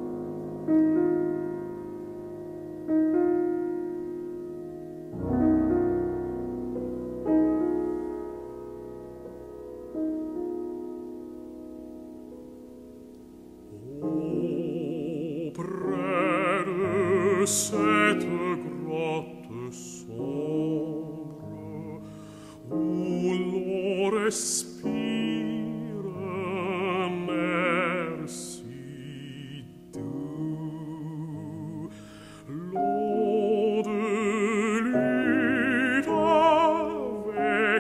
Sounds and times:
Music: 0:00.0 - 0:37.8.

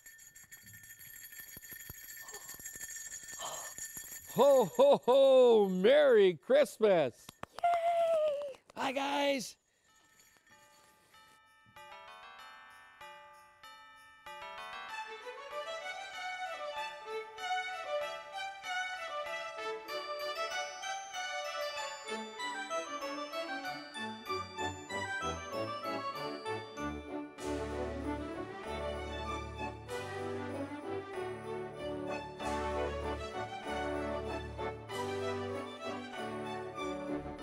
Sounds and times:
Music: 0:09.9 - 0:37.4.

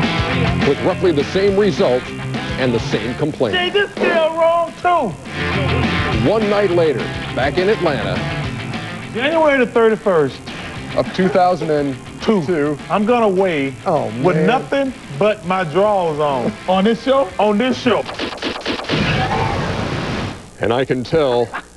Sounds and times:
Music: 0:00.0 - 0:19.8.

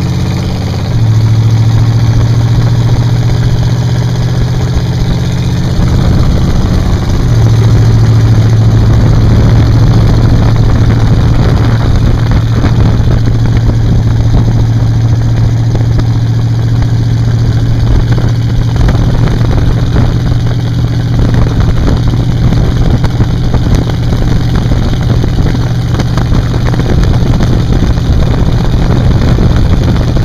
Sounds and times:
Vehicle: 0:00.0 - 0:30.2.

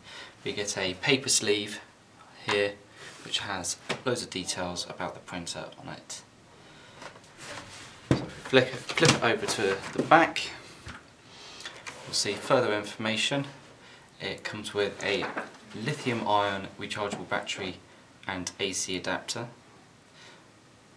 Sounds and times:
Speech: 0:00.4 - 0:06.3, 0:08.5 - 0:10.6, 0:12.1 - 0:13.6, 0:14.2 - 0:19.6.

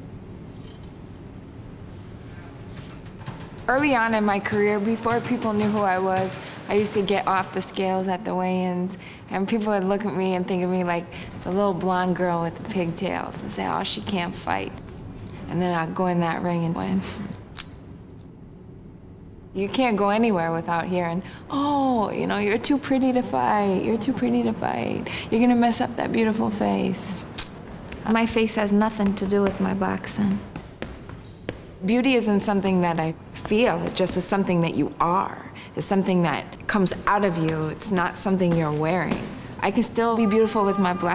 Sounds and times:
Speech: 0:03.7 - 0:14.8, 0:19.6 - 0:27.3, 0:28.0 - 0:30.5, 0:31.8 - 0:41.1.

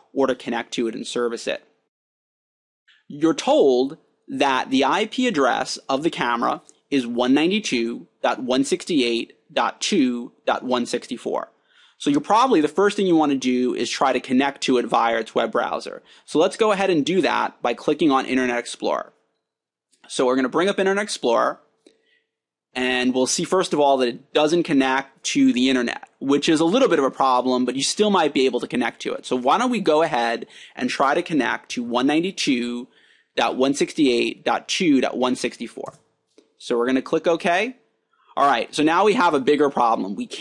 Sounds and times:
Speech: 0:00.0 - 0:01.7, 0:03.1 - 0:19.2, 0:20.1 - 0:21.6, 0:22.8 - 0:36.0, 0:36.6 - 0:37.8, 0:38.4 - 0:40.4.

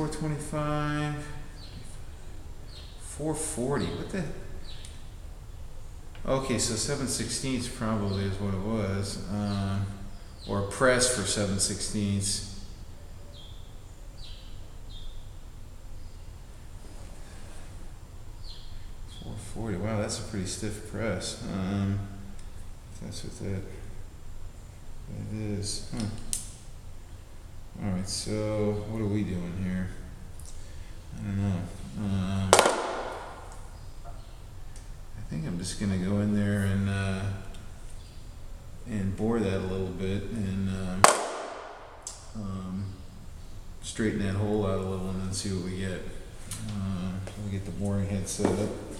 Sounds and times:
Speech: 0:00.0 - 0:01.5, 0:03.0 - 0:04.5, 0:06.2 - 0:12.6, 0:19.1 - 0:22.2, 0:22.9 - 0:23.9, 0:25.1 - 0:26.3, 0:27.8 - 0:30.1, 0:31.1 - 0:32.8, 0:35.2 - 0:37.6, 0:38.8 - 0:41.1, 0:42.3 - 0:43.0, 0:43.8 - 0:48.9.

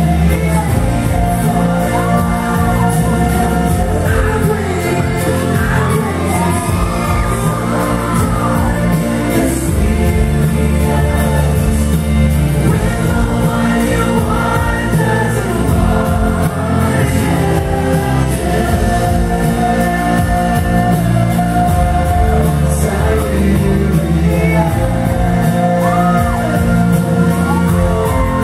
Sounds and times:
Music: 0:00.0 - 0:28.4
Singing: 0:00.0 - 0:28.4
Shout: 0:02.2 - 0:09.1, 0:25.7 - 0:28.4.

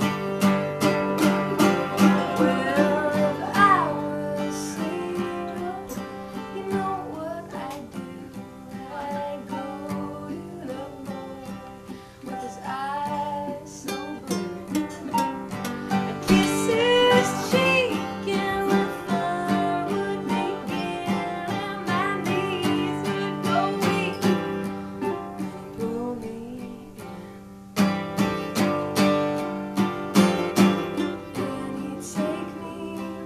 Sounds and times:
Flamenco: 0:00.0 - 0:33.2
Singing: 0:01.5 - 0:27.0, 0:31.0 - 0:33.2.

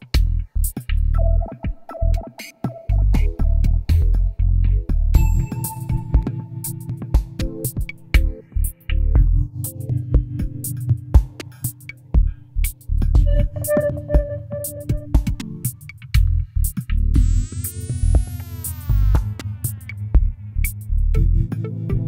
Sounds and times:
Drum machine: 0:00.0 - 0:04.3, 0:04.9 - 0:22.0
Guitar: 0:01.2 - 0:16.5
Ambient music: 0:04.8 - 0:22.0.

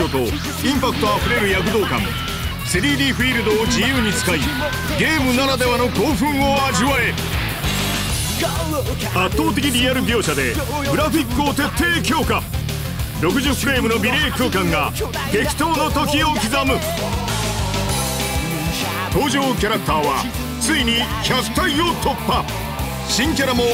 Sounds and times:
Speech: 0:00.0 - 0:07.2, 0:08.3 - 0:12.5, 0:13.2 - 0:17.0, 0:18.8 - 0:22.5, 0:23.1 - 0:23.7
Music: 0:00.0 - 0:23.7.

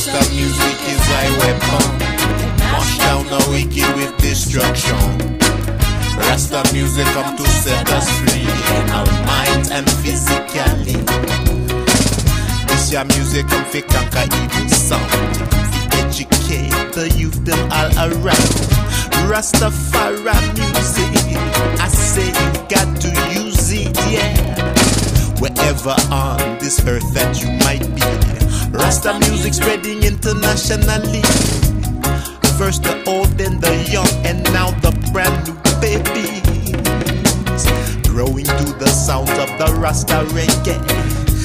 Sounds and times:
Rhythm and blues: 0:00.0 - 0:41.4.

